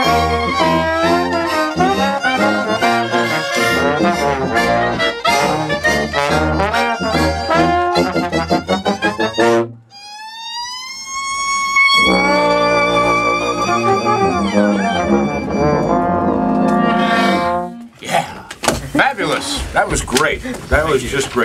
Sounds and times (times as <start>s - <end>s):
Trombone: 0.0s - 9.8s, 12.0s - 17.9s.